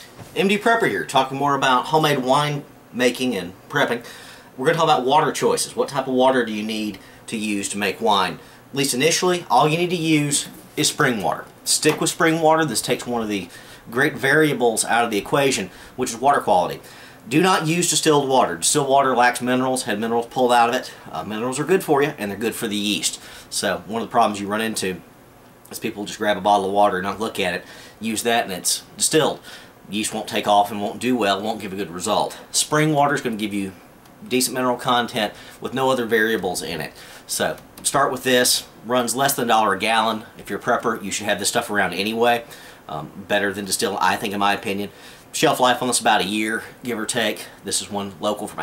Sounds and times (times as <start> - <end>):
Speech: 0.4 - 4.0, 4.6 - 25.1, 25.7 - 48.6.